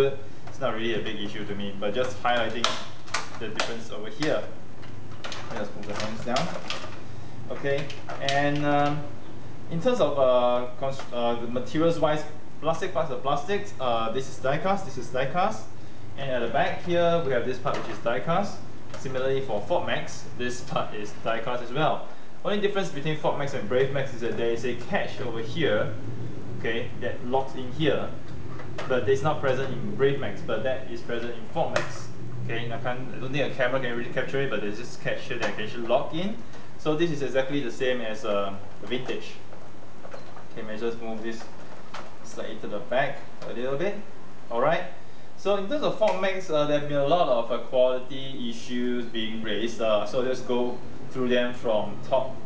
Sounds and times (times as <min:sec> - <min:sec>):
Speech: 0:00.0 - 0:04.6, 0:05.2 - 0:06.8, 0:07.5 - 0:26.0, 0:26.6 - 0:28.2, 0:28.8 - 0:39.5, 0:40.6 - 0:41.5, 0:42.2 - 0:52.4.